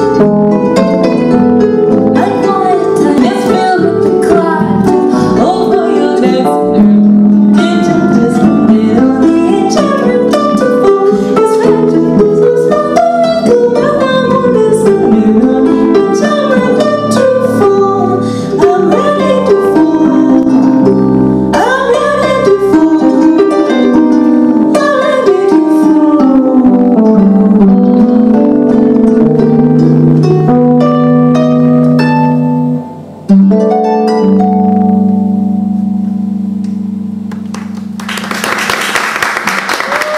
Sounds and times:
Bass guitar: 0.0 - 38.8
Bowed string instrument: 0.0 - 40.1.

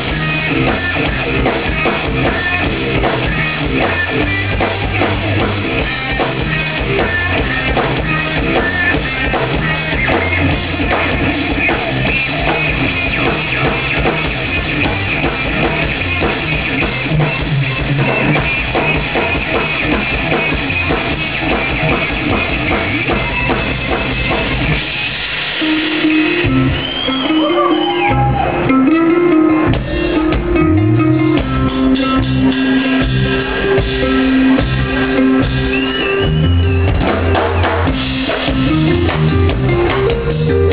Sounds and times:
Drum kit: 0.0 - 40.7
Guitar: 0.0 - 40.7.

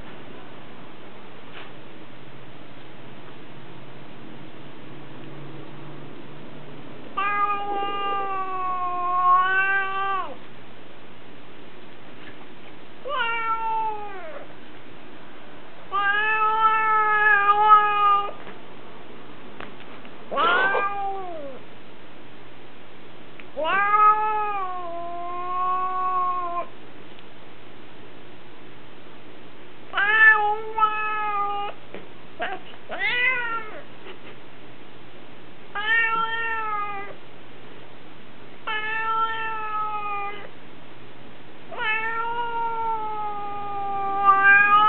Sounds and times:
Cat: 7.2 - 10.4, 13.0 - 14.5, 15.9 - 18.4, 20.3 - 21.7, 23.6 - 26.8, 29.9 - 31.8, 32.4 - 34.2, 35.8 - 37.2, 38.7 - 40.6, 41.7 - 44.8.

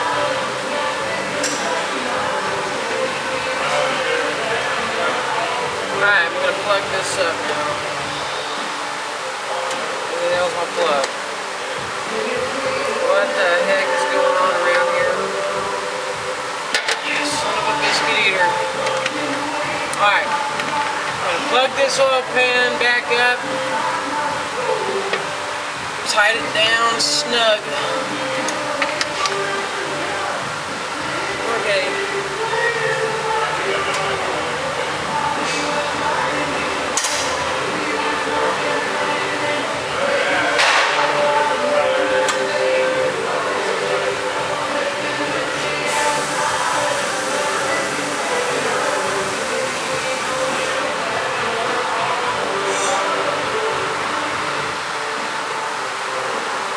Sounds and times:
Music: 0.0 - 56.7.

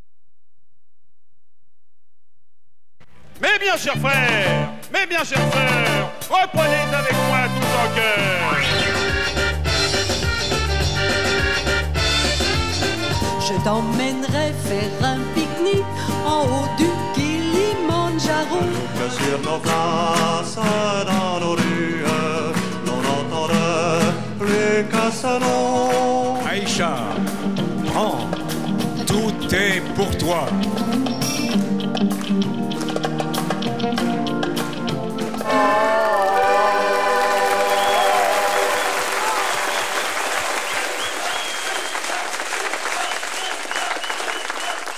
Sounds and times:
Music: 3.1 - 42.2
Male singing: 16.8 - 27.3, 29.0 - 30.5.

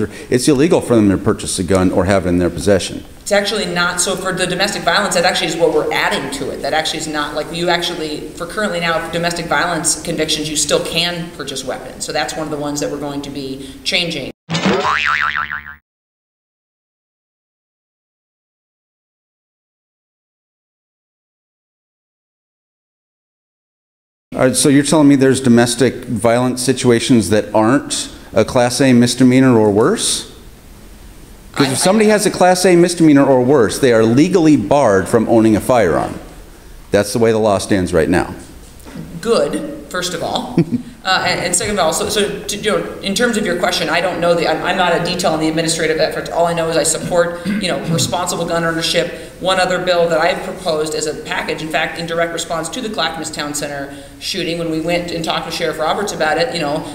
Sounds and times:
Speech: 0.0 - 14.3, 24.3 - 30.4, 31.6 - 36.3, 36.9 - 38.5, 39.1 - 56.9.

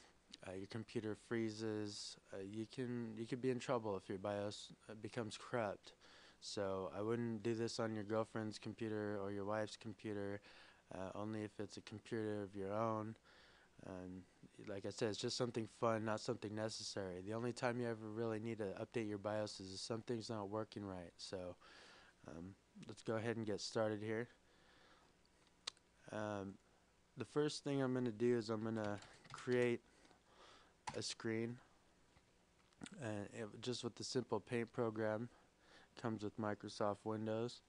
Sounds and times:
Speech: 0.4 - 13.2, 13.8 - 21.6, 22.2 - 24.4, 26.0 - 26.6, 27.2 - 29.8, 30.9 - 31.7, 32.8 - 35.4, 36.0 - 37.6.

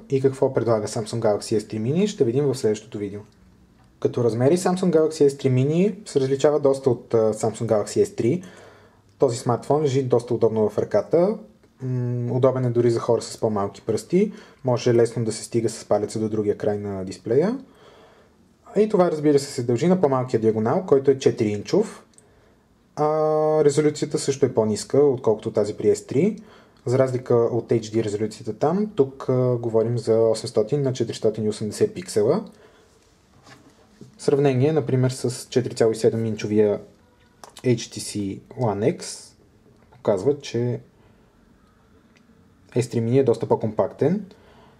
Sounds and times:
Speech: 0.0 - 3.4, 4.0 - 8.5, 9.2 - 17.7, 18.6 - 22.2, 23.0 - 32.6, 34.0 - 40.9, 42.7 - 44.4.

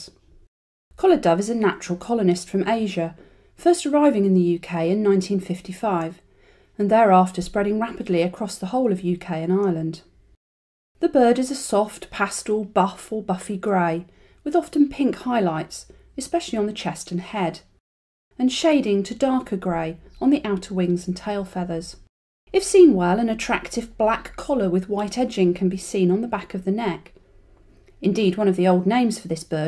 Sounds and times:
Speech: 1.0 - 6.2, 6.8 - 10.1, 11.0 - 17.7, 18.4 - 27.2, 28.0 - 29.6.

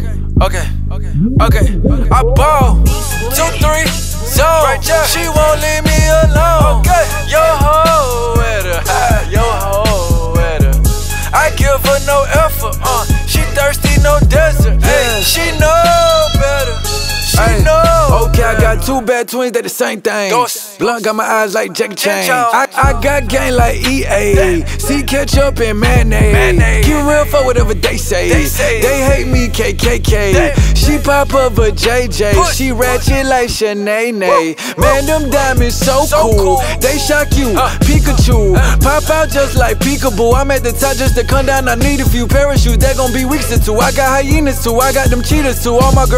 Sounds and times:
Background music: 0.0 - 19.2, 22.2 - 33.6, 34.3 - 46.1.

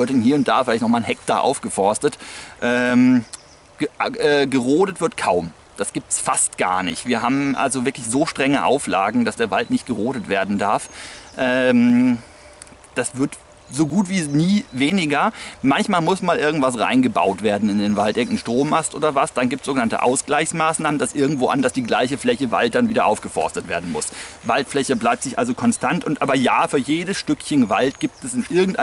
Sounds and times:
Speech: 0.0 - 12.2, 12.9 - 28.8
Outside, rural or natural: 0.0 - 28.8.

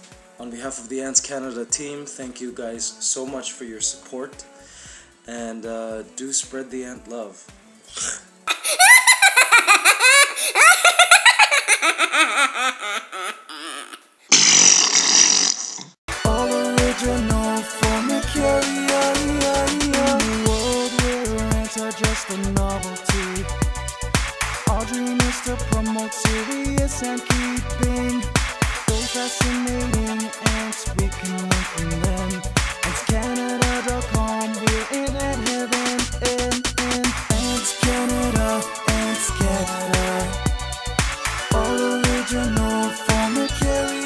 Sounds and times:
Music: 0.0 - 10.0, 16.1 - 44.0
Fart: 14.3 - 16.0.

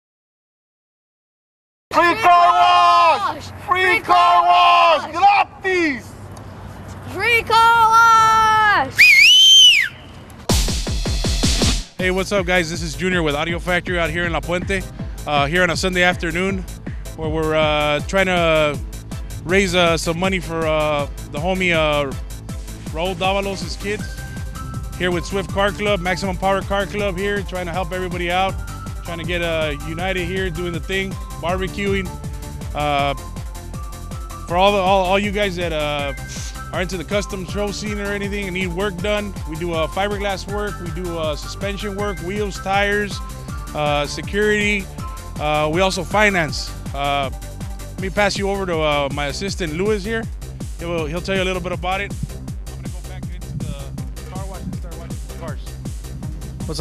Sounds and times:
Music: 10.5 - 56.8
Speech: 12.0 - 16.6, 23.0 - 24.0, 25.0 - 28.5, 36.8 - 43.2, 43.8 - 44.8, 45.4 - 47.3, 48.0 - 50.2, 50.8 - 52.1, 52.8 - 55.7.

